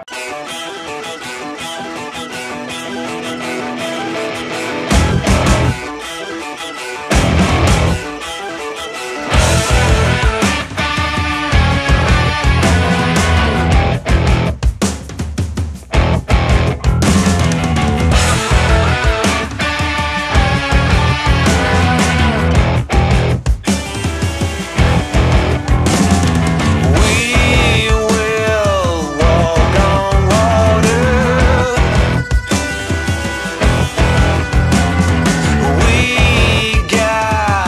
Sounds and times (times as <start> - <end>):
Happy music: 0.0 - 14.6, 15.9 - 37.6
Soul music: 0.0 - 14.6, 16.0 - 37.6
Ska: 0.0 - 37.6.